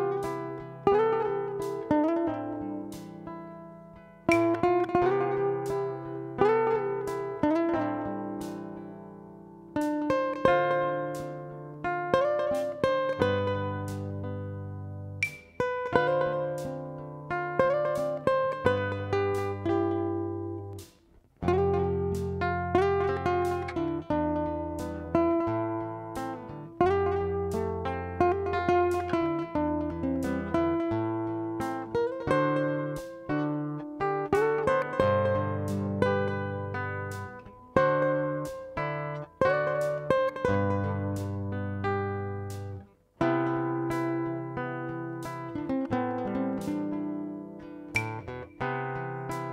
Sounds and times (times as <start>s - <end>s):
Guitar: 0.0s - 49.5s.